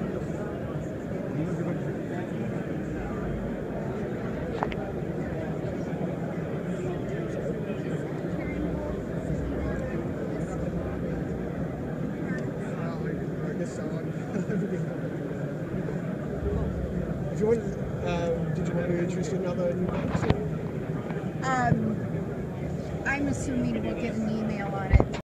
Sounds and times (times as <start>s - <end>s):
Speech: 21.4s - 22.0s, 23.1s - 25.2s.